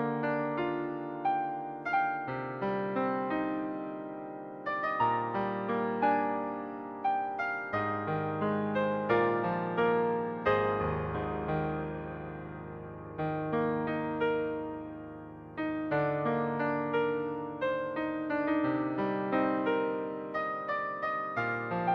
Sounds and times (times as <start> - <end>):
Piano: 0.0 - 21.9.